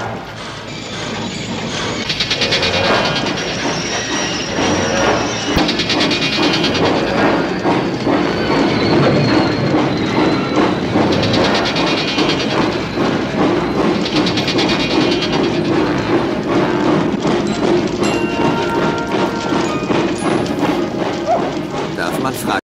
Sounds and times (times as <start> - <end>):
Heavy engine (low frequency): 0.0 - 22.6
Music: 13.0 - 22.0
Speech: 22.0 - 22.6.